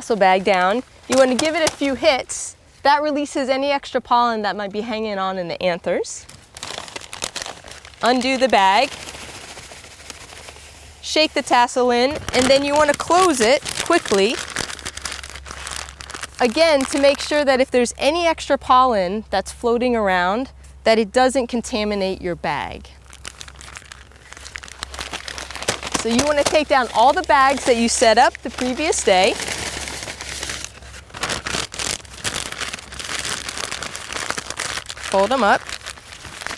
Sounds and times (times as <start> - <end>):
Crumpling, crinkling: 0.0 - 2.3, 6.2 - 17.5, 22.8 - 36.5
Speech: 0.0 - 6.2, 8.0 - 8.9, 11.0 - 14.4, 16.4 - 23.0, 26.0 - 29.4, 35.1 - 35.6
Outside, rural or natural: 0.0 - 36.5.